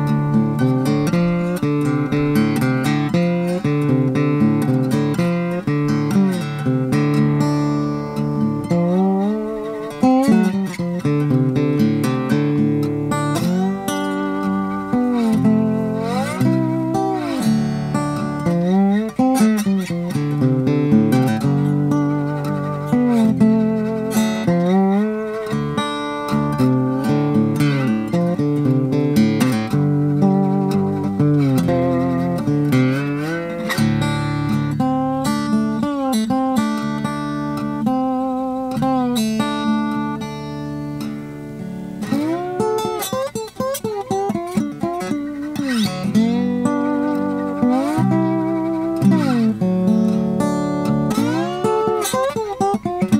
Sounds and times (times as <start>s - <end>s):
Acoustic guitar: 0.0s - 53.1s.